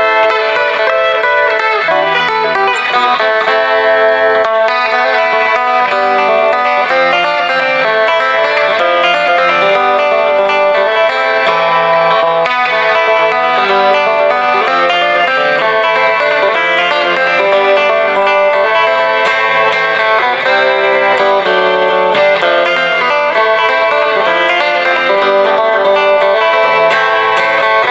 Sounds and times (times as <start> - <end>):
Country: 0.0 - 27.9
Guitar: 0.0 - 27.9.